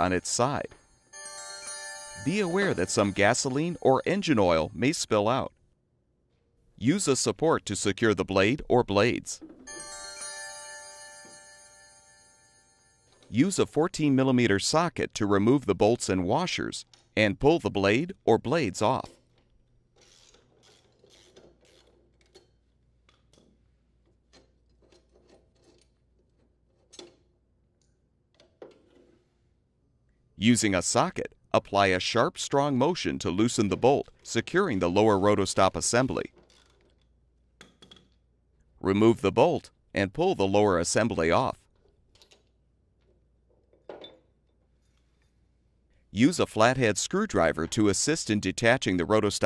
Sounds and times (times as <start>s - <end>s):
Speech: 0.0s - 0.7s, 2.2s - 5.6s, 6.8s - 9.4s, 13.3s - 19.2s, 30.4s - 36.3s, 38.8s - 41.6s, 46.2s - 49.4s
Music: 9.6s - 13.1s.